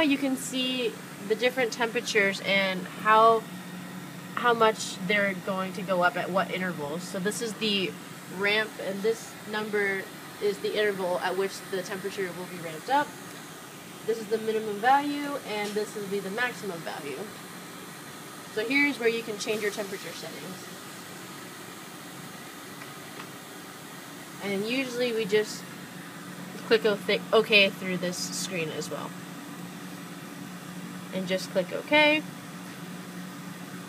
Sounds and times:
Speech: 0.0 - 3.5, 4.4 - 13.1, 14.1 - 17.3, 18.6 - 20.7, 24.4 - 25.7, 26.6 - 29.2, 31.1 - 32.3.

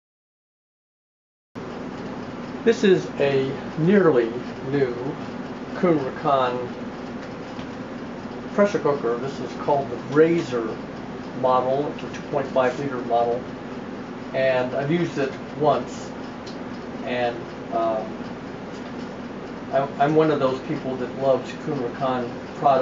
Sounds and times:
Speech: 2.7 - 5.2, 5.8 - 6.7, 8.5 - 10.8, 11.4 - 13.5, 14.4 - 16.2, 17.0 - 18.2, 19.7 - 22.8.

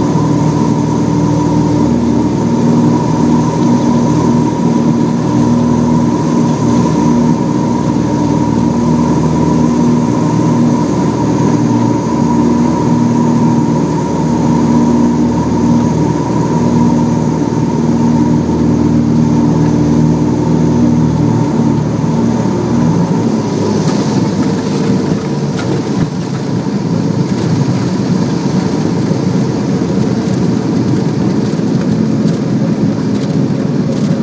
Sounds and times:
Vehicle: 0.0 - 34.2.

